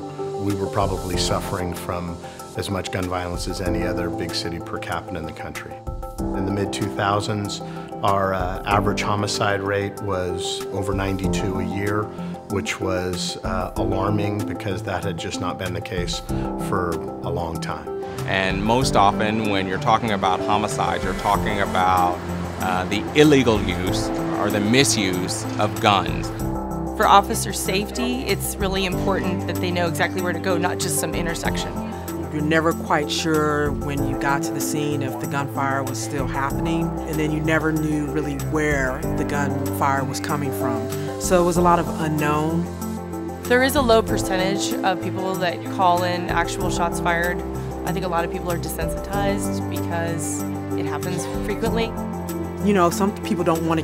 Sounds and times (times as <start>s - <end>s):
Music: 0.0s - 53.8s
Speech: 0.4s - 5.8s, 6.4s - 26.3s, 43.5s - 51.9s.